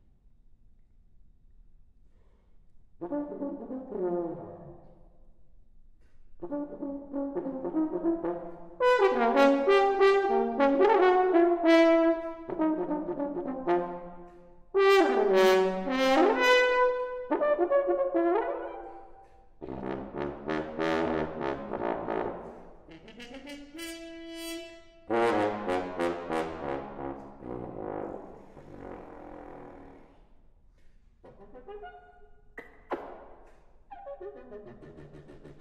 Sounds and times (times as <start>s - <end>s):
French horn: 3.0s - 5.1s, 6.4s - 30.5s, 31.3s - 32.3s.